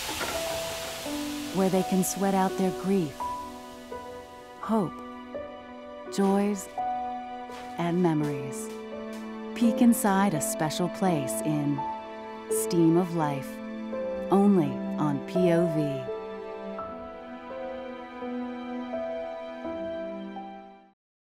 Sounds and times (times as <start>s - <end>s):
Music: 0.0s - 21.0s
Speech: 1.6s - 3.2s, 4.6s - 5.0s, 6.1s - 6.7s, 7.8s - 8.7s, 9.6s - 11.8s, 12.6s - 13.5s, 14.3s - 16.1s.